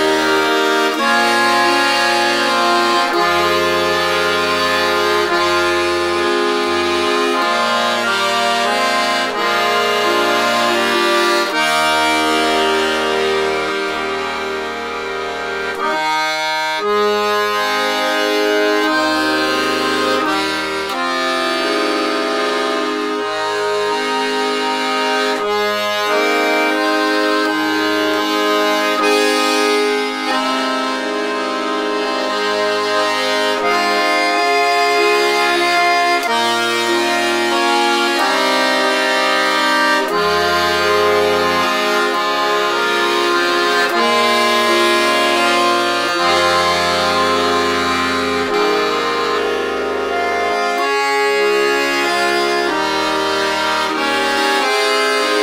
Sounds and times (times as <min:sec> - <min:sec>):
Accordion: 0:00.0 - 0:55.4.